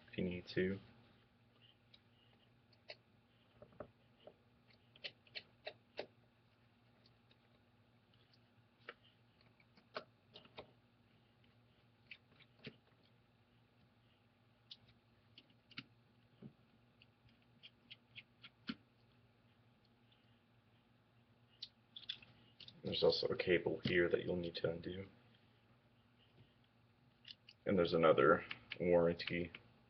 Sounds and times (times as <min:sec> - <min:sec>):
Speech: 0:00.1 - 0:00.9, 0:22.8 - 0:25.2, 0:27.6 - 0:29.6.